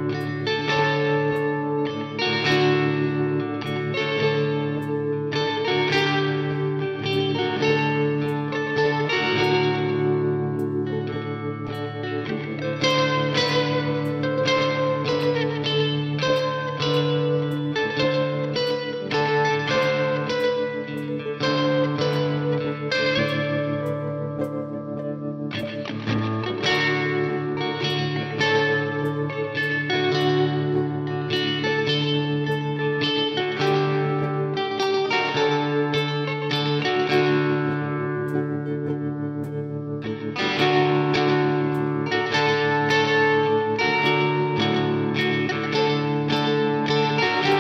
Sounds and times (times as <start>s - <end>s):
Music: 0.0s - 47.6s.